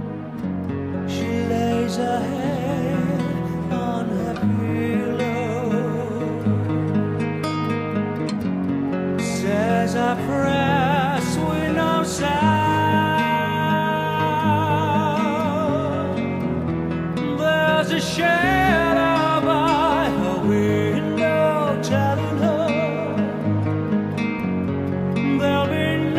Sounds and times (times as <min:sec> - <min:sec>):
Music: 0:00.0 - 0:26.1.